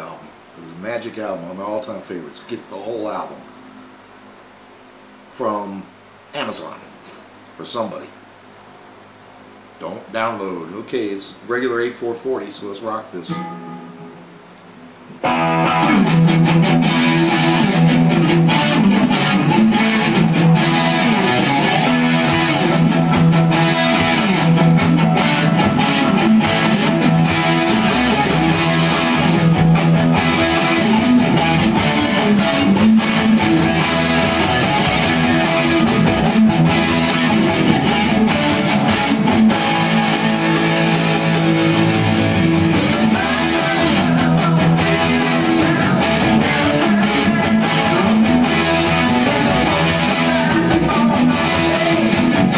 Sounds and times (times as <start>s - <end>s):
Bass guitar: 13.3s - 52.5s
Electric guitar: 13.3s - 52.5s.